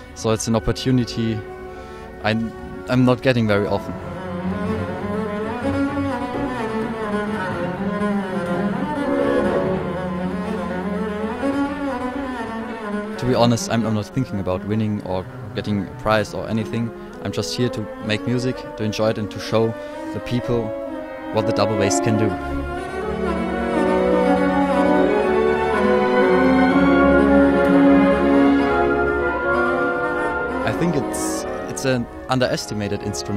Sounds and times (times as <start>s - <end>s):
Cello: 0.0s - 33.3s
Classical music: 0.0s - 33.3s
Double bass: 0.0s - 33.3s
Orchestra: 0.0s - 33.3s
Violin, fiddle: 0.0s - 33.3s
Speech: 0.2s - 1.4s, 2.2s - 4.0s, 13.2s - 20.7s, 21.3s - 22.4s, 30.6s - 33.3s.